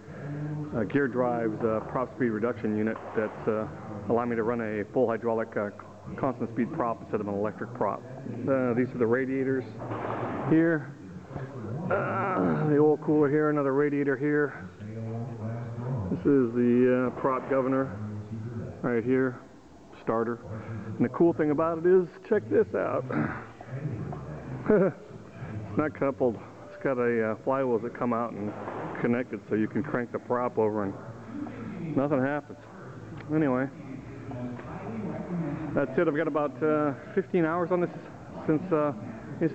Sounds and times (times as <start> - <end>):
Speech: 0.2 - 9.8, 10.4 - 39.5.